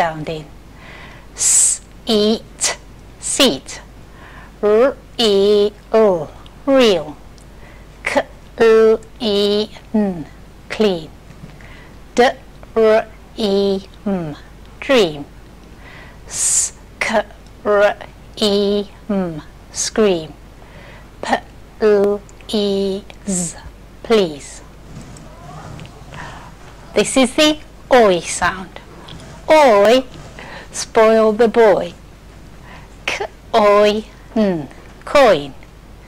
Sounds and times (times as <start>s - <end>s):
Speech: 0.0s - 0.5s, 1.4s - 3.9s, 4.6s - 7.2s, 8.0s - 11.2s, 12.2s - 15.3s, 16.3s - 20.4s, 21.2s - 32.0s, 33.1s - 35.6s.